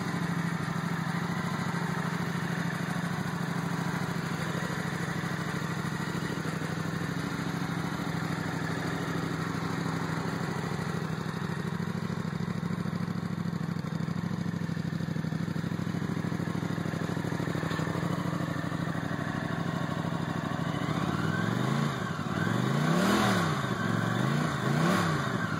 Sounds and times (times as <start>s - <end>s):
Vehicle: 0.0s - 25.5s.